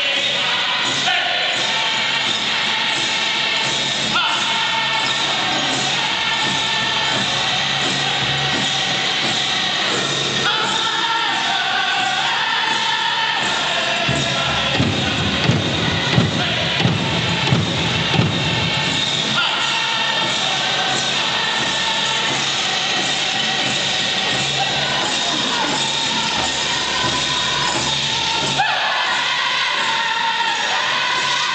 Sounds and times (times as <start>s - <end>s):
Music: 0.0s - 31.5s.